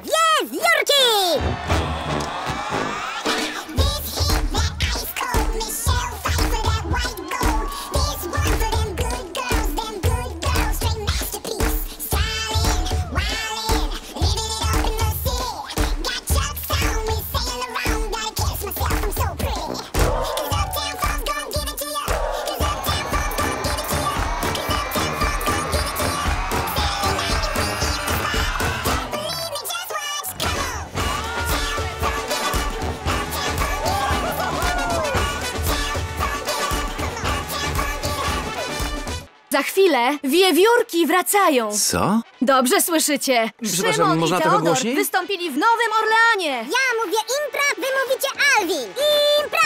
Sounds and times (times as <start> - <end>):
Music: 1.2 - 49.6.